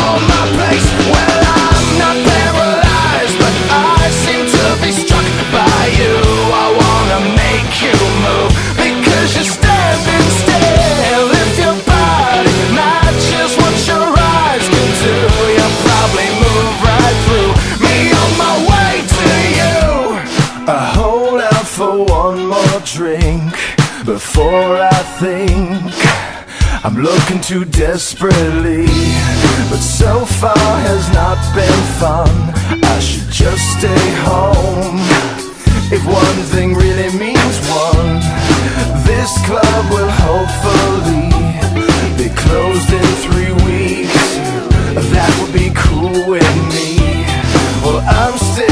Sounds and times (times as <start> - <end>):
Music: 0.0 - 48.7.